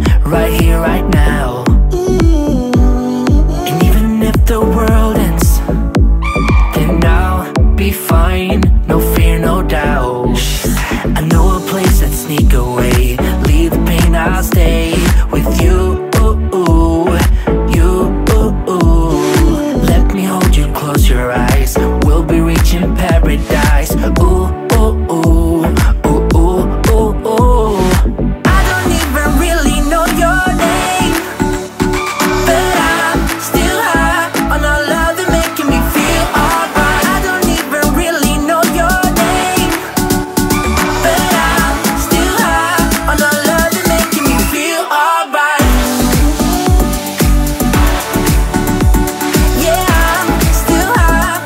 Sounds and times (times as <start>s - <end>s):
Music: 0.0s - 51.4s.